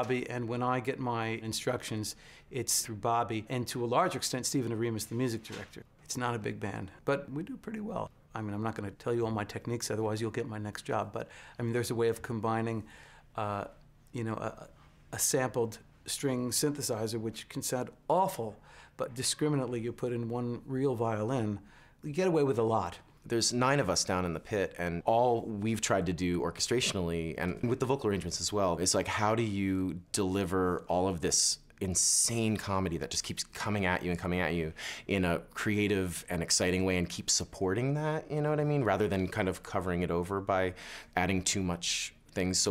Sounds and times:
Speech: 0:00.0 - 0:42.7.

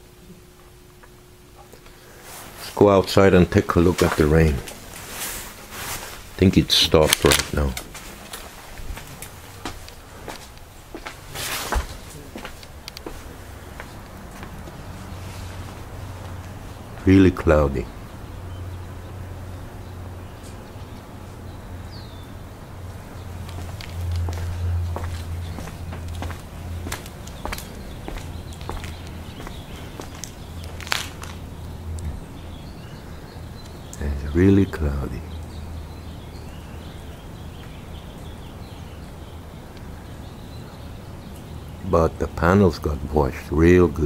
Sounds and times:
Speech: 0:02.6 - 0:04.8, 0:06.4 - 0:07.9, 0:17.0 - 0:17.9, 0:34.0 - 0:35.4, 0:41.8 - 0:44.0.

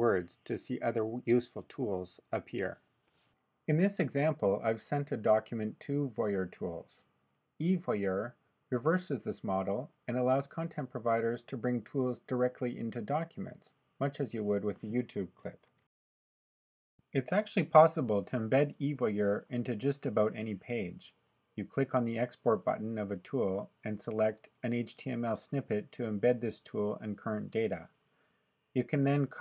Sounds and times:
Speech: 0:00.0 - 0:02.8, 0:03.7 - 0:15.7, 0:17.2 - 0:27.9, 0:28.8 - 0:29.4.

